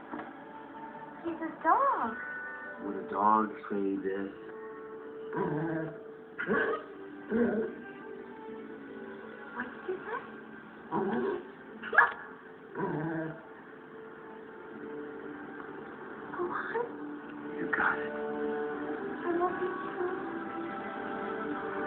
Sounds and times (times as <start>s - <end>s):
Music: 0.0s - 21.8s
Bow-wow: 5.4s - 7.8s, 10.9s - 13.4s.